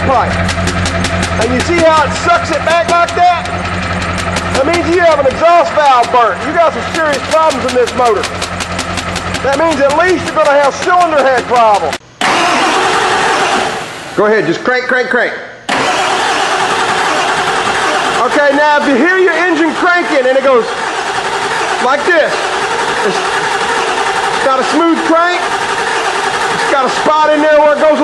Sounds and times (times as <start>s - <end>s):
Speech: 0.0s - 0.3s, 1.4s - 3.5s, 4.6s - 8.3s, 9.4s - 12.0s, 14.2s - 15.5s, 18.2s - 20.7s, 21.8s - 22.4s, 23.0s - 23.2s, 24.4s - 25.5s, 26.6s - 28.0s
Idling: 0.0s - 14.2s, 15.7s - 28.0s
Medium engine (mid frequency): 0.0s - 14.2s, 15.7s - 28.0s
Vehicle: 0.0s - 14.2s, 15.7s - 28.0s.